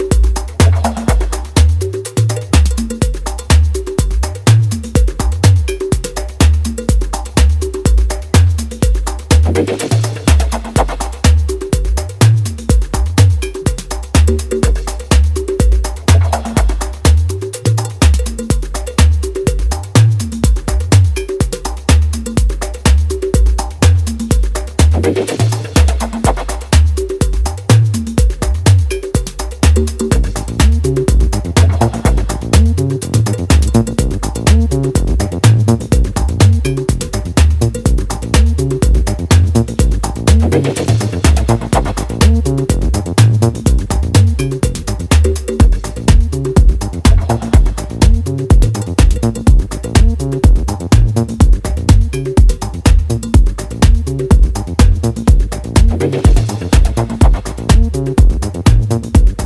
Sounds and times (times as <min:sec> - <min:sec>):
Music: 0:00.0 - 0:59.4.